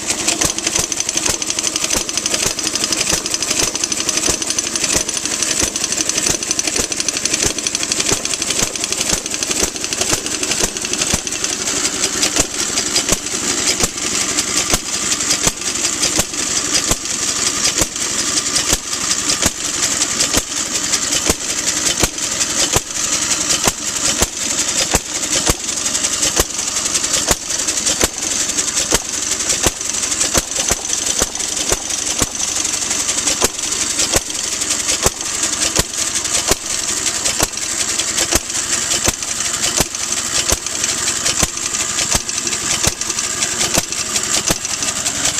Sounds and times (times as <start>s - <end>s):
Engine: 0.0s - 45.3s.